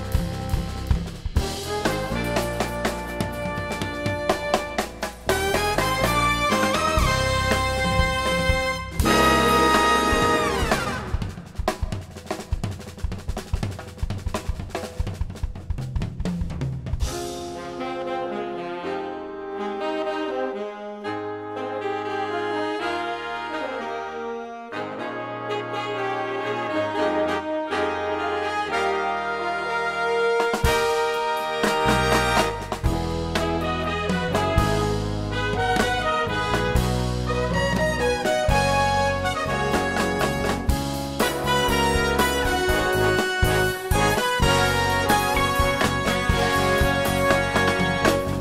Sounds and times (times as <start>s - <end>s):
Saxophone: 0.0s - 11.5s, 17.5s - 48.4s
Trombone: 0.0s - 11.6s, 17.0s - 48.4s
Trumpet: 0.0s - 11.8s, 17.1s - 48.4s.